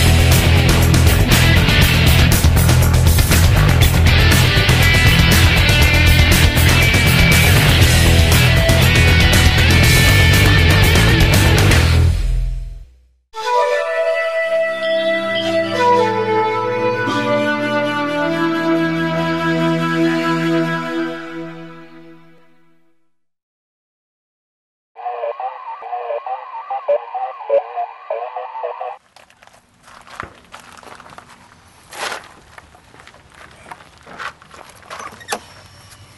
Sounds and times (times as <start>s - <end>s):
Music: 0.0s - 23.1s.